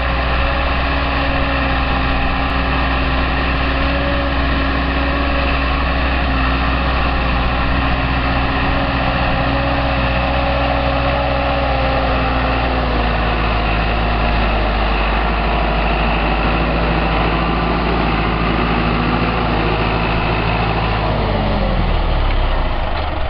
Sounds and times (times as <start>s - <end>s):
Vehicle: 0.0s - 23.2s.